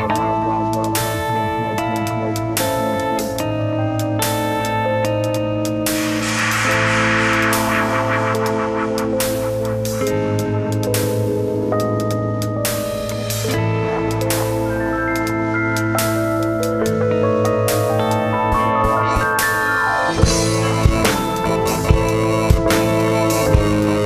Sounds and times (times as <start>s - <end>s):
Rhythm and blues: 0.0s - 24.0s.